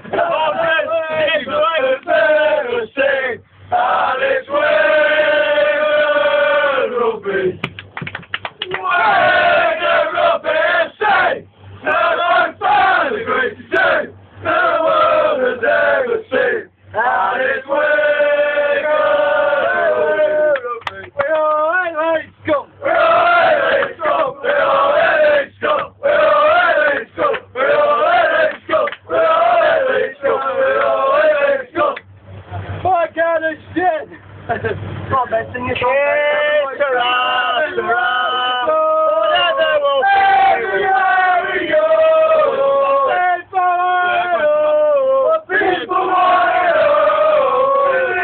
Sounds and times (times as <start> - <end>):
Choir: 0.1 - 7.6, 8.8 - 20.7, 22.8 - 32.0, 36.8 - 48.2.